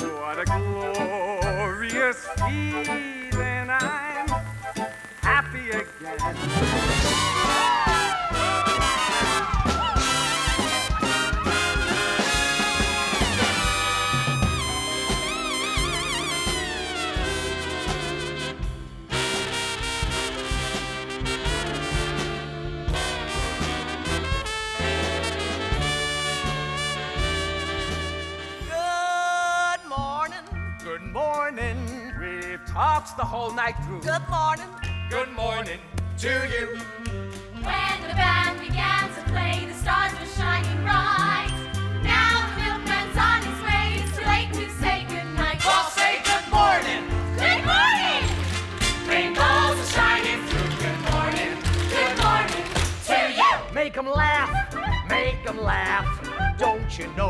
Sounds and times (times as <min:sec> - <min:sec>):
Music: 0:00.0 - 0:57.3.